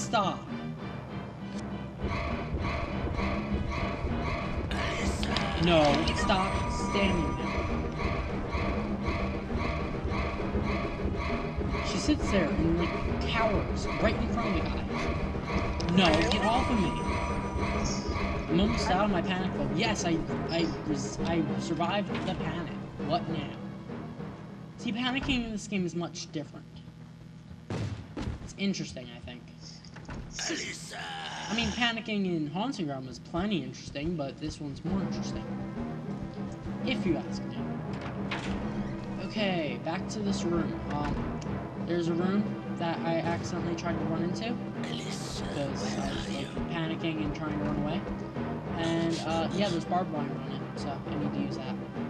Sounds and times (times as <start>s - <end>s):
Speech: 0.0s - 0.5s, 4.7s - 7.5s, 11.9s - 15.1s, 15.8s - 17.1s, 17.8s - 23.6s, 24.8s - 26.6s, 28.5s - 29.8s, 30.4s - 35.4s, 36.8s - 37.7s, 39.2s - 41.2s, 41.9s - 48.0s, 48.8s - 51.8s
Music: 0.0s - 52.0s.